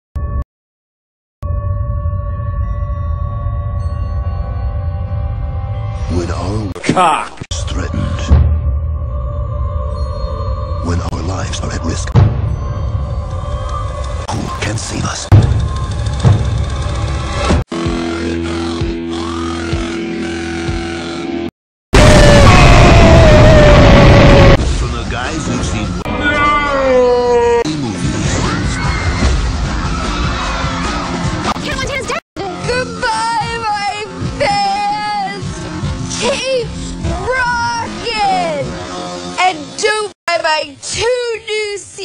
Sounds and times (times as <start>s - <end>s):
Music: 1.4s - 6.7s, 7.5s - 21.5s, 27.7s - 40.1s.